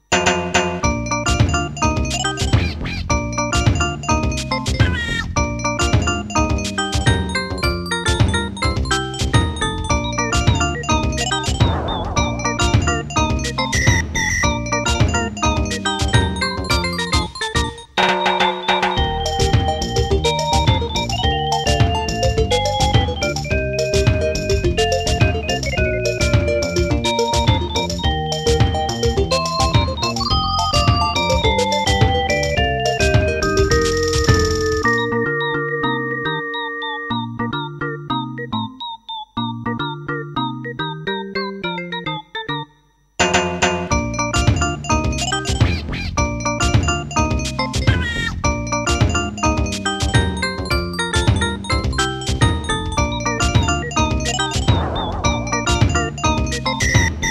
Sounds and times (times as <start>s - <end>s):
Video game music: 0.0s - 57.3s.